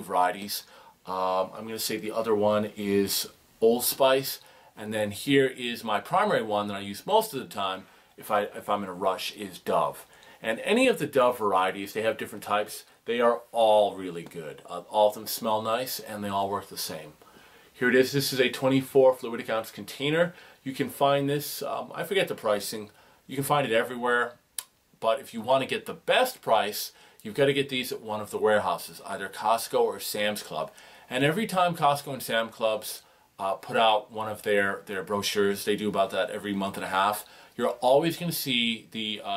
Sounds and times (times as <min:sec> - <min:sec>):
Speech: 0:00.0 - 0:17.2, 0:17.8 - 0:39.3.